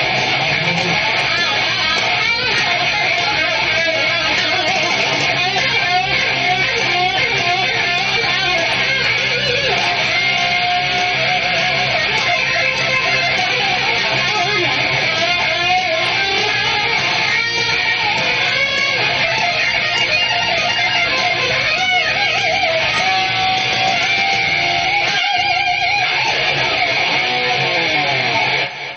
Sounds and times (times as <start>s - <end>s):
Music: 0.0s - 28.9s.